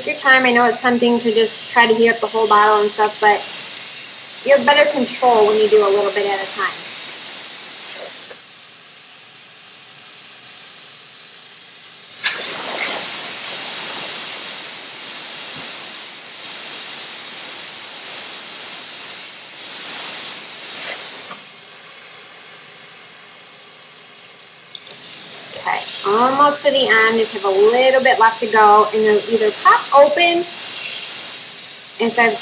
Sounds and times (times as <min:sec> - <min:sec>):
Speech: 0:00.0 - 0:03.5, 0:04.5 - 0:06.8, 0:25.6 - 0:31.0, 0:32.0 - 0:32.4.